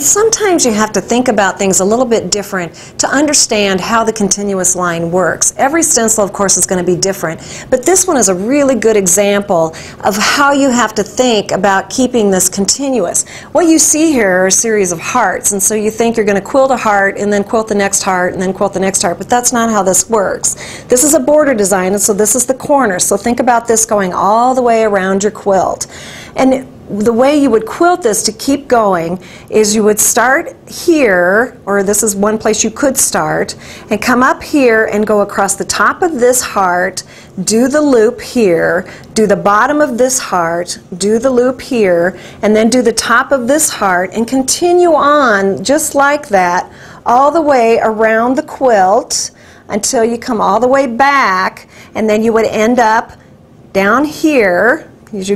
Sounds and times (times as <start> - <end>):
Speech: 0.0 - 53.2, 53.8 - 55.3.